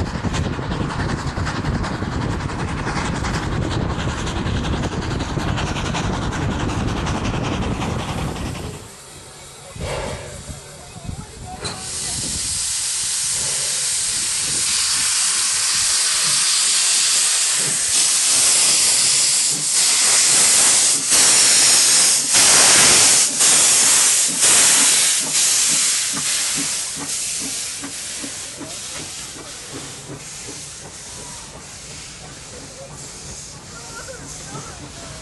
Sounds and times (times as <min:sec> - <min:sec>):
Railroad car, train wagon: 0:00.0 - 0:35.2
Train: 0:00.0 - 0:35.2.